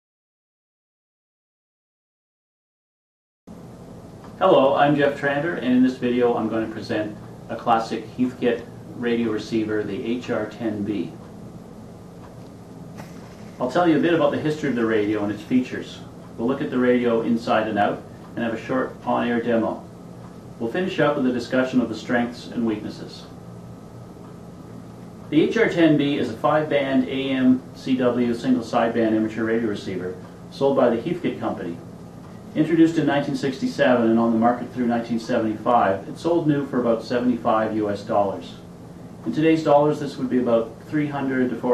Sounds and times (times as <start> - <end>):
Speech: 4.4 - 11.2, 13.6 - 19.9, 20.6 - 23.4, 25.3 - 31.9, 32.5 - 41.7.